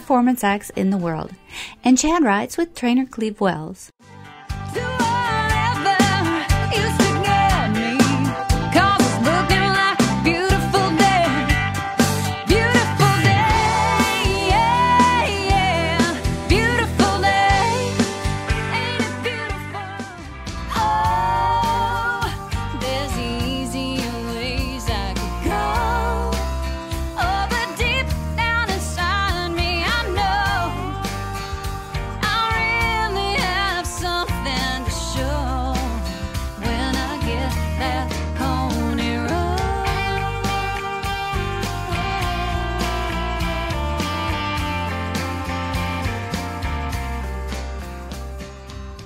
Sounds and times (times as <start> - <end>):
Music: 0.0 - 2.7, 4.0 - 49.0.